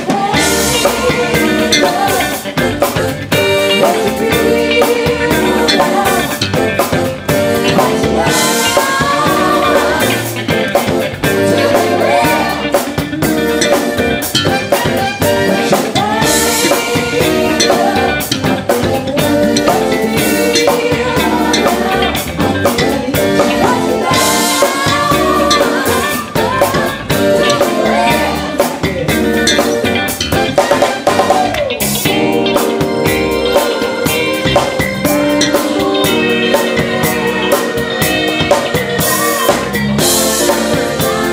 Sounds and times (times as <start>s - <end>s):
Funk: 0.0s - 41.3s.